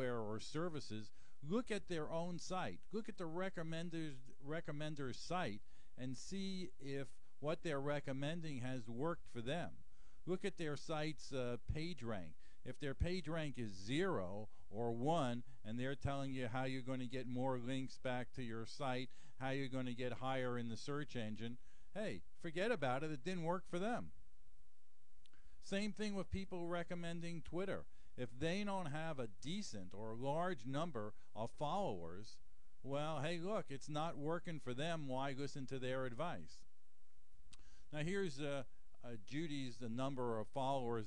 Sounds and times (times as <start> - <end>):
Speech: 0.0 - 24.2, 25.6 - 36.7, 37.9 - 41.0.